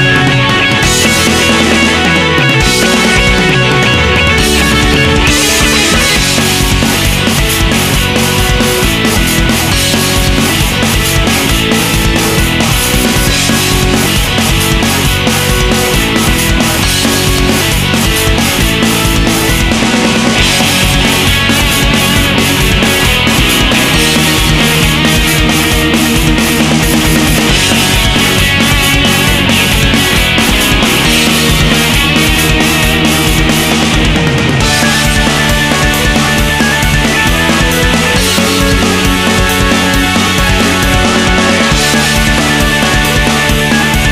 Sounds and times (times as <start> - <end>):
Dance music: 0.0 - 44.1.